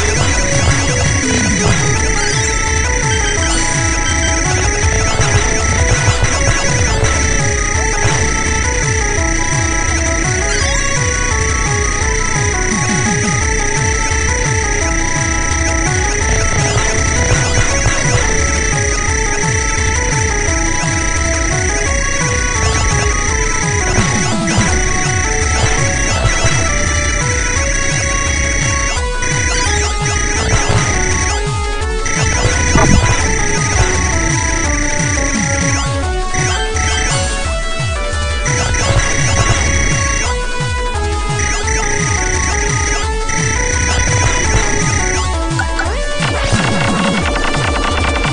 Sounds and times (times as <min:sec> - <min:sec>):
Music: 0:00.0 - 0:48.3.